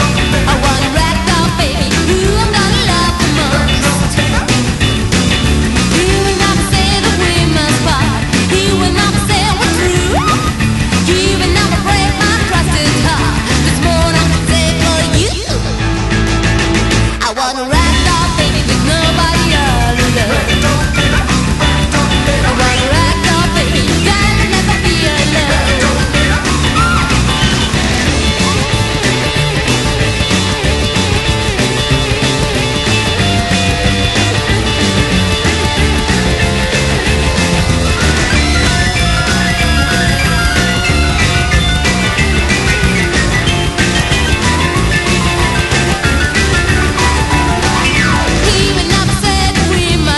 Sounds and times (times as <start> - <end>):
Music: 0.0 - 50.1.